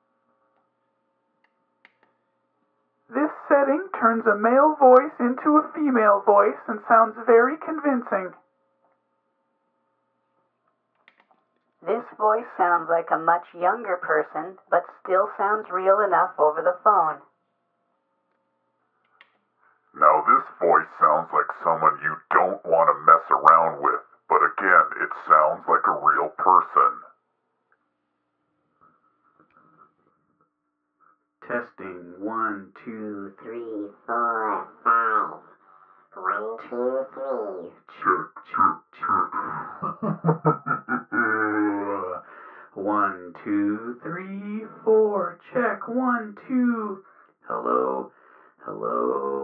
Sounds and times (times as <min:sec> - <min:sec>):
Speech: 0:03.2 - 0:08.4, 0:11.8 - 0:17.2, 0:20.0 - 0:27.1, 0:31.4 - 0:35.5, 0:36.2 - 0:49.4.